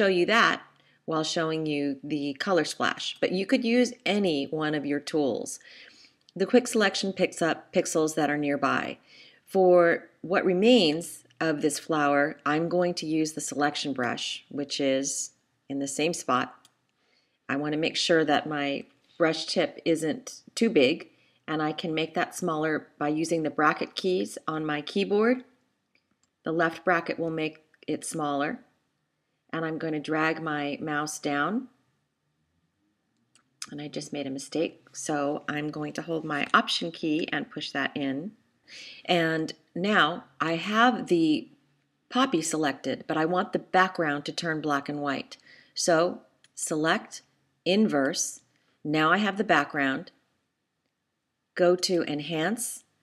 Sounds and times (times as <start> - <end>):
Speech: 0.0 - 16.6, 17.5 - 25.4, 26.5 - 28.7, 29.6 - 31.7, 33.6 - 41.5, 42.1 - 50.1, 51.6 - 52.9.